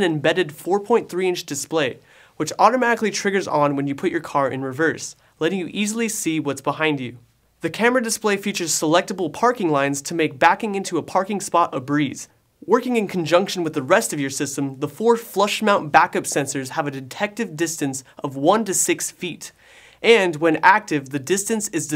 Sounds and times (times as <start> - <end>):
Speech: 0.0 - 21.9.